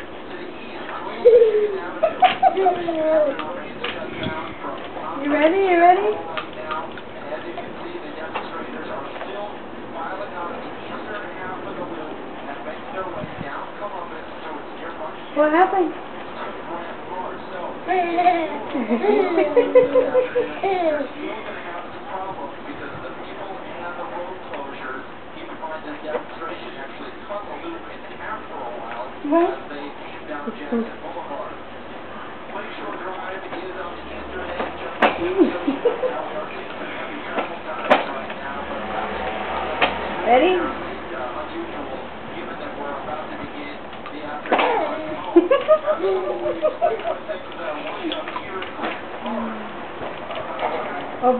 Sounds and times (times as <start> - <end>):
Hubbub, speech noise, speech babble: 0.0 - 51.3
Speech: 0.0 - 51.3.